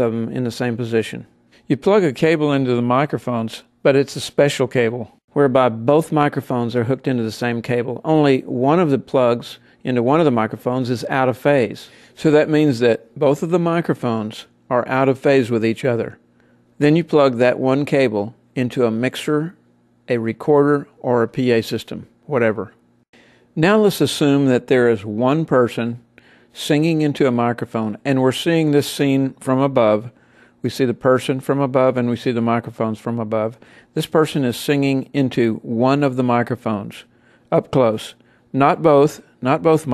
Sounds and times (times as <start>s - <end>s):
Speech: 0.0s - 16.2s, 16.8s - 22.8s, 23.6s - 39.9s.